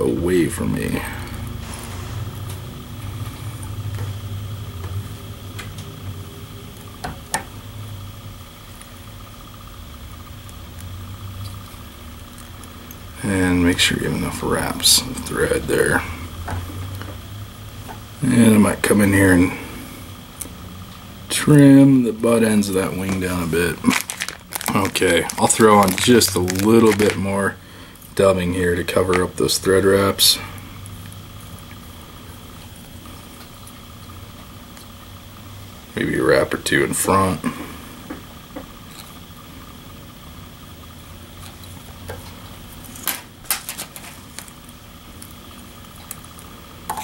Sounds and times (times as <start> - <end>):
Speech: 0.0 - 1.3, 13.2 - 16.2, 18.2 - 19.6, 21.3 - 24.0, 24.7 - 27.6, 28.2 - 30.5, 35.9 - 37.6.